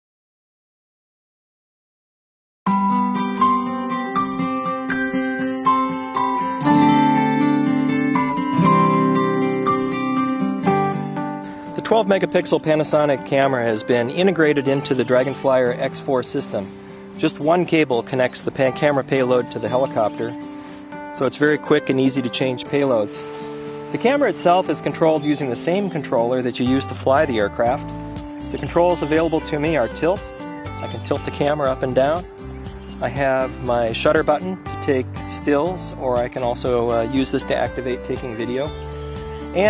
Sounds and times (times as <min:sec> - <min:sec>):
Music: 0:02.7 - 0:39.7
Speech: 0:11.8 - 0:20.3, 0:21.2 - 0:23.2, 0:24.0 - 0:27.8, 0:28.5 - 0:32.2, 0:33.0 - 0:38.7.